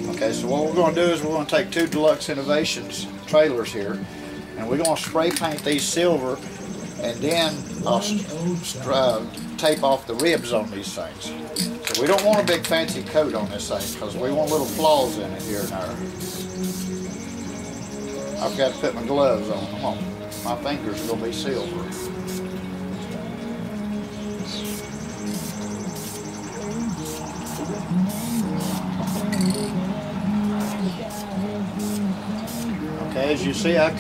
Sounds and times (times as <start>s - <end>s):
Speech: 0.0s - 3.9s, 12.0s - 16.0s, 18.4s - 21.9s, 33.1s - 34.0s
Music: 0.0s - 34.0s.